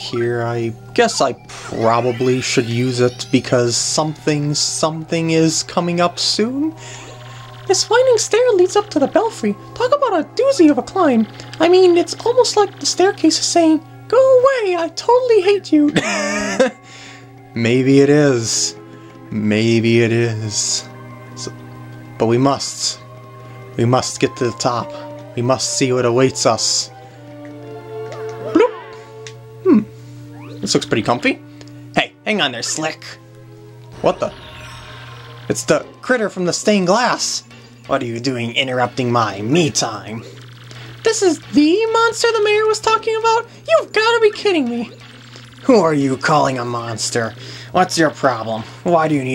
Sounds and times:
Speech: 0.0s - 6.7s, 7.7s - 16.0s, 22.2s - 23.0s, 23.8s - 26.9s, 30.6s - 31.4s, 32.0s - 33.2s, 35.5s - 40.3s, 41.0s - 45.0s, 45.6s - 49.3s.

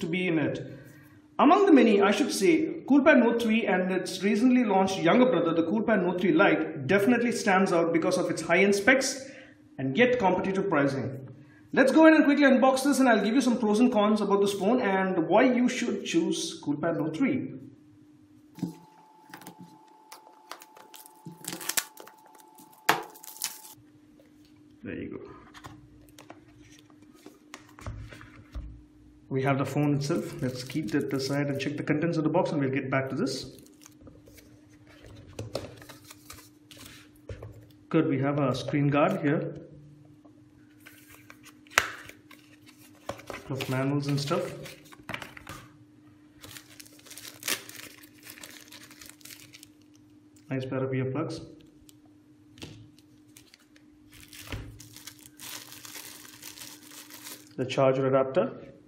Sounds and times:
Speech: 0.0s - 0.7s, 1.4s - 11.2s, 11.8s - 17.6s, 24.8s - 25.4s, 29.3s - 33.6s, 37.9s - 39.7s, 43.5s - 44.7s, 50.5s - 51.6s, 57.6s - 58.8s.

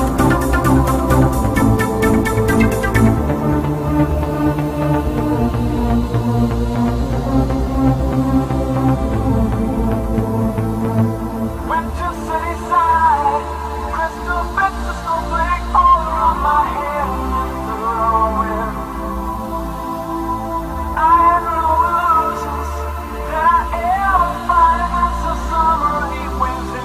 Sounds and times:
Electronic music: 0.0s - 26.8s.

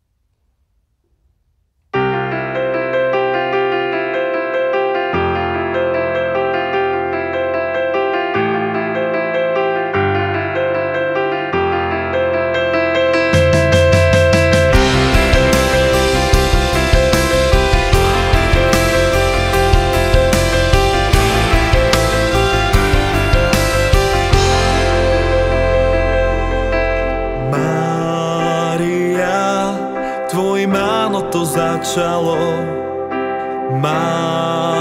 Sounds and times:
Music: 2.0s - 34.8s.

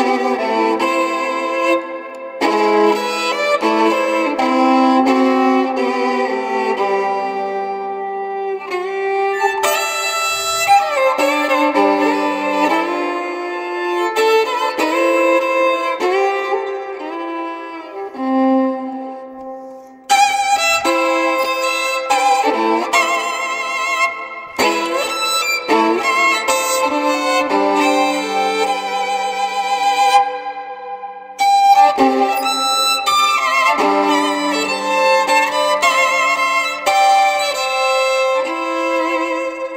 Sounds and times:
Violin, fiddle: 0.0s - 39.7s.

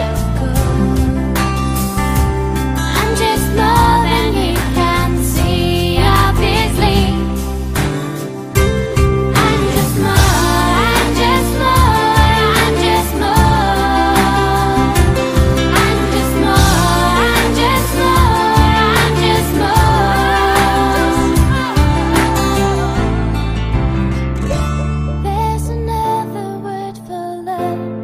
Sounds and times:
Music: 0.0s - 28.0s.

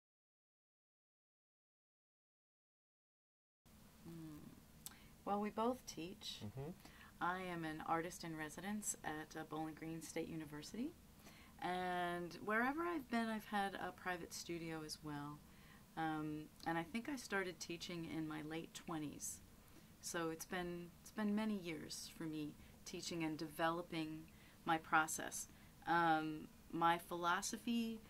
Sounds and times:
Speech: 5.3s - 11.0s, 11.6s - 15.4s, 16.0s - 19.4s, 20.0s - 28.0s.

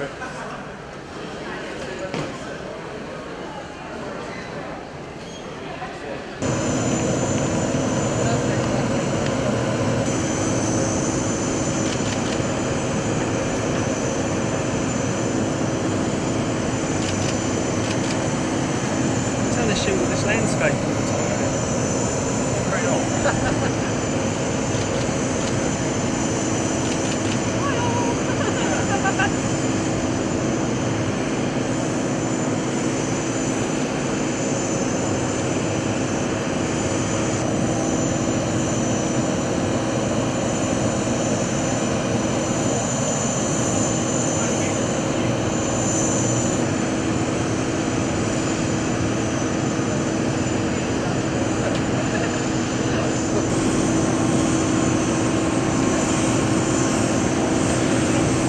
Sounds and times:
Outside, urban or manmade: 6.3s - 58.4s
Aircraft engine: 6.4s - 58.4s.

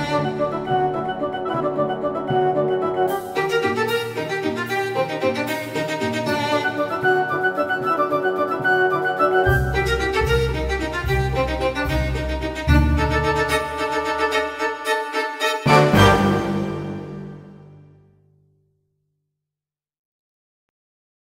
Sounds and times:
Violin, fiddle: 0.0s - 2.1s, 2.9s - 17.0s.

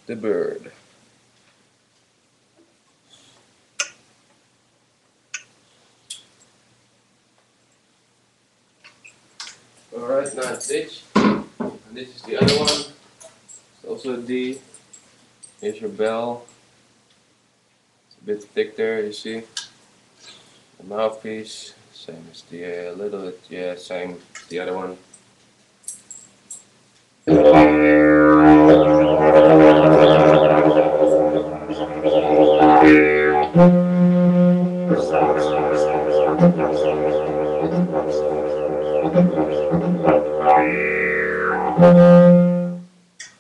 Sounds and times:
Didgeridoo: 27.3s - 42.9s.

